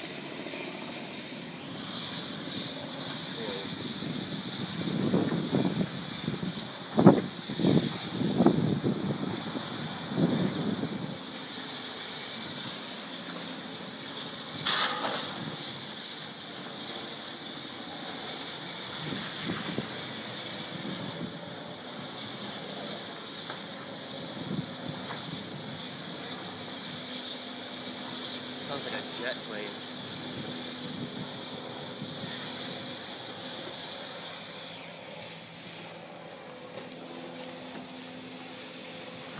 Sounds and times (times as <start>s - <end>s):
Wind noise (microphone): 2.5s - 11.2s, 18.9s - 21.4s, 24.2s - 26.4s, 30.0s - 33.0s.